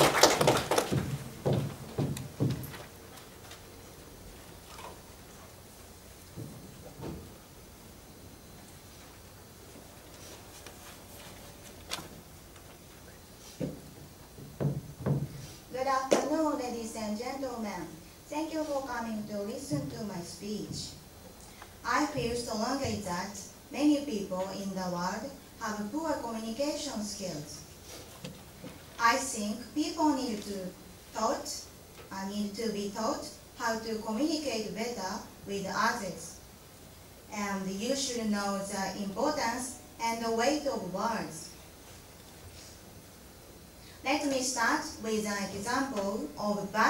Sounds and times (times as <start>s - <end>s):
Female speech, woman speaking: 15.8s - 21.0s, 21.8s - 27.7s, 29.0s - 36.4s, 37.3s - 41.6s, 44.1s - 46.9s.